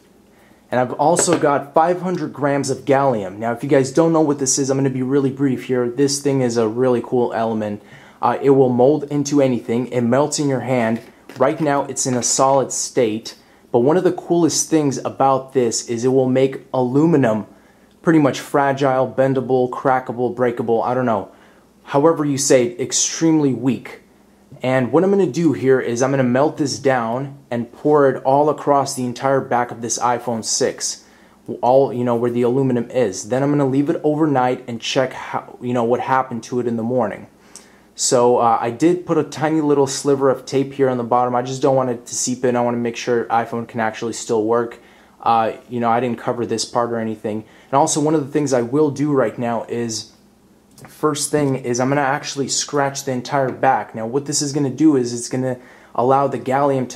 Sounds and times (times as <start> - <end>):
Speech: 0.7 - 37.4, 38.0 - 50.2, 50.8 - 56.9.